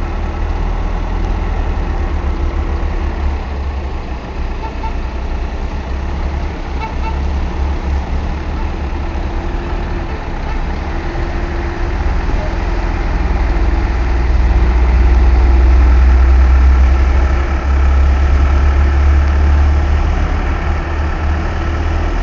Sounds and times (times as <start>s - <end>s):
Truck: 0.0s - 22.2s.